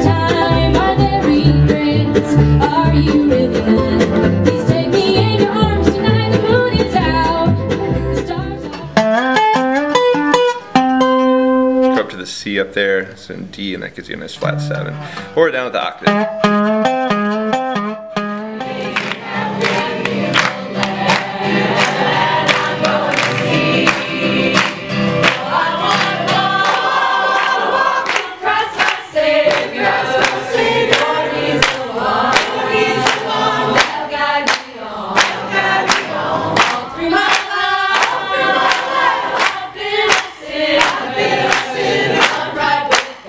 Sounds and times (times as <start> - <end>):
Bluegrass: 0.0 - 43.2
Speech: 12.0 - 16.2.